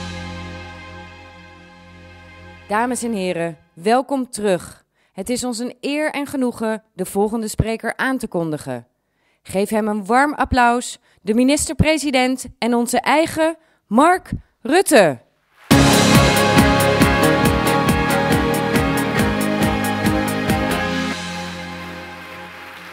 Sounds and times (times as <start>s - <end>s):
Music: 0.0s - 3.8s, 15.7s - 22.9s
Narration, monologue: 2.4s - 15.6s
Female speech, woman speaking: 2.7s - 8.9s, 9.5s - 15.3s.